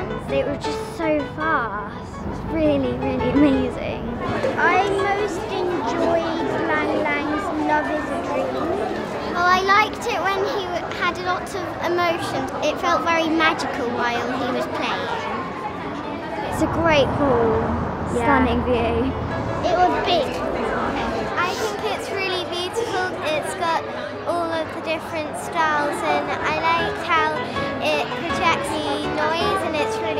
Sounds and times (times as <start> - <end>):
Music: 0.0 - 12.3, 18.5 - 30.1
Speech: 16.5 - 30.1.